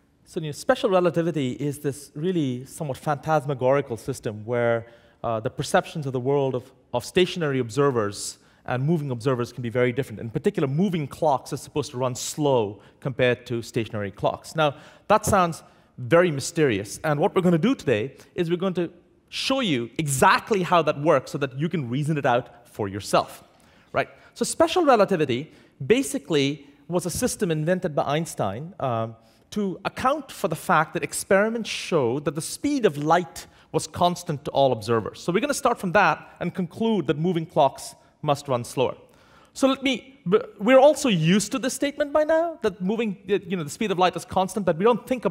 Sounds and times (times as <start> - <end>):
Speech: 0.3 - 45.3.